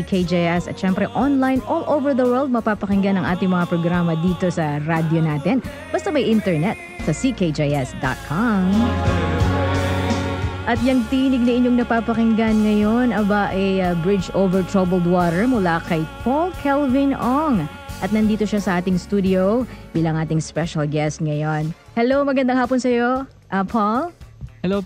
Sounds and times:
Speech: 0.0s - 8.9s, 10.7s - 24.8s
Music: 0.0s - 24.8s.

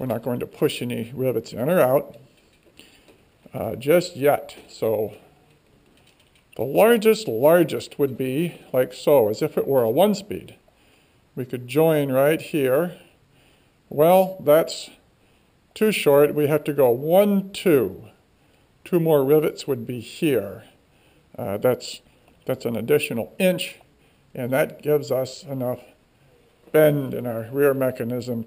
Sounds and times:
Speech: 0.0s - 2.2s, 3.5s - 5.3s, 6.6s - 10.6s, 11.4s - 13.0s, 13.9s - 15.0s, 15.8s - 18.2s, 18.9s - 20.8s, 21.4s - 26.0s, 26.7s - 28.4s.

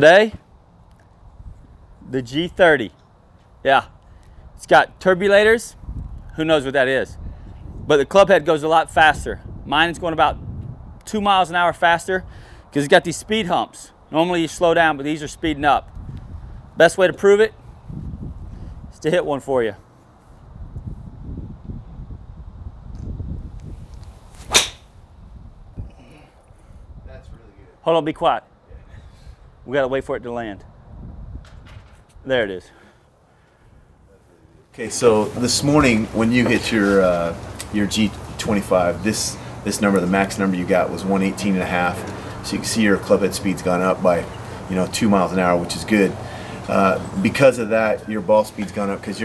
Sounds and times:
Speech: 12.8s - 15.8s, 16.8s - 17.6s, 19.0s - 19.8s, 27.1s - 28.8s, 29.7s - 30.7s, 34.1s - 49.2s.

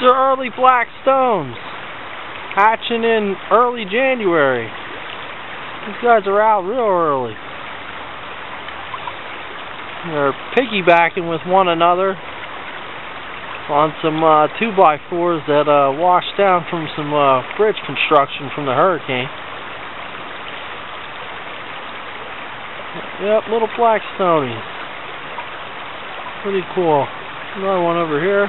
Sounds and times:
Speech: 0.0s - 1.6s, 2.6s - 4.7s, 5.8s - 7.4s, 10.0s - 12.2s, 13.7s - 19.3s, 23.0s - 24.6s, 26.4s - 28.4s
Stream: 0.0s - 28.4s.

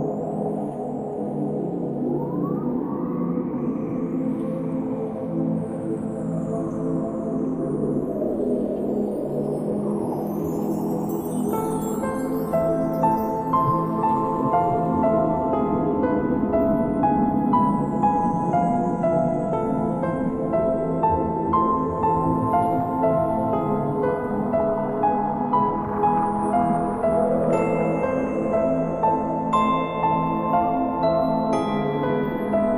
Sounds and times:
New-age music: 0.0s - 32.7s.

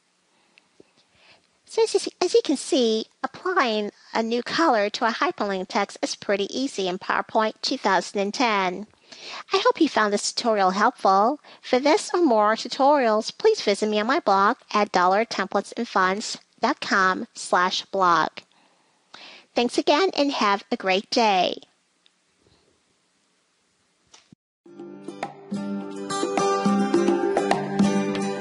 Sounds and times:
Narration, monologue: 0.4s - 22.2s.

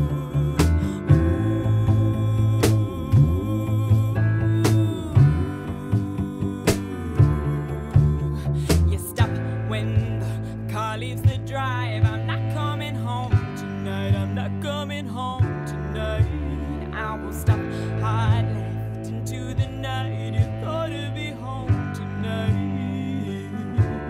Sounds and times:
Music: 0.0s - 24.1s.

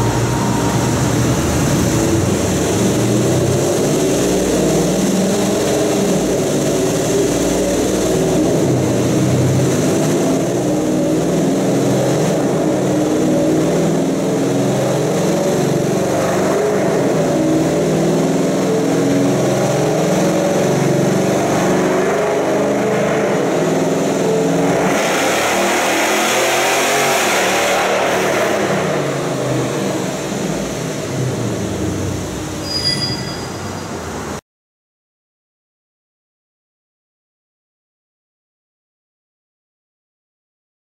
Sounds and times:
Car: 0.0s - 34.4s.

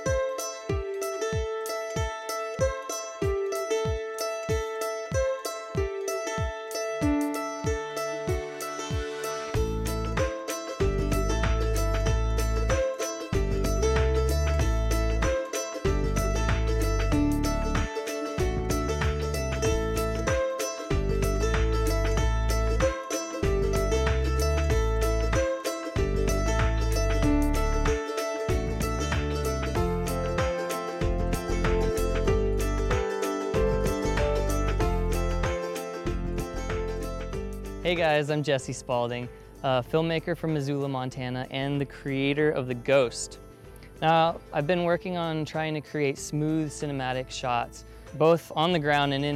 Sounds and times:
Music: 0.0s - 49.3s.

